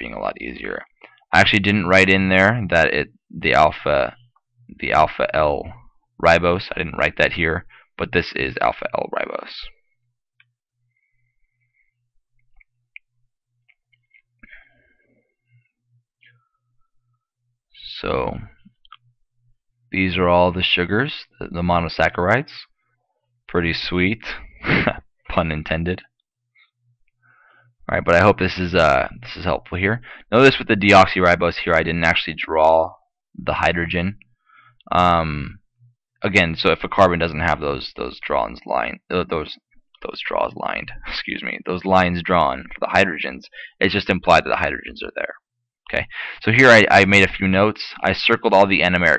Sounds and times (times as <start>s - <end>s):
Speech: 0.0s - 4.2s, 4.8s - 9.8s, 17.8s - 18.6s, 20.0s - 22.7s, 23.5s - 26.1s, 27.8s - 34.2s, 34.8s - 35.6s, 36.2s - 49.1s.